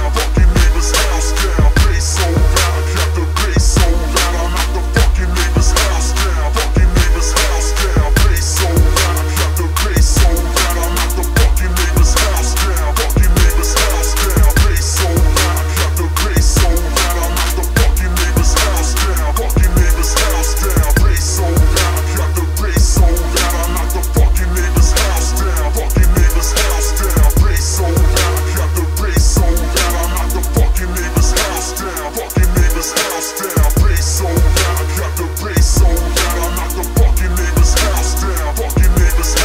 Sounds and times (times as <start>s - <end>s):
Hip hop music: 0.0s - 39.4s.